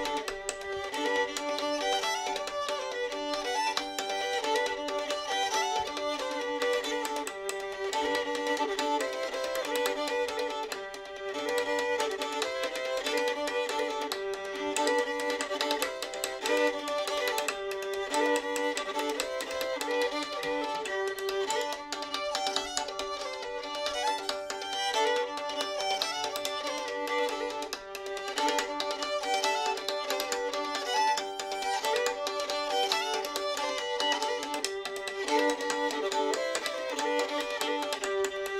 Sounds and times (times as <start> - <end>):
Violin, fiddle: 0.0 - 38.5.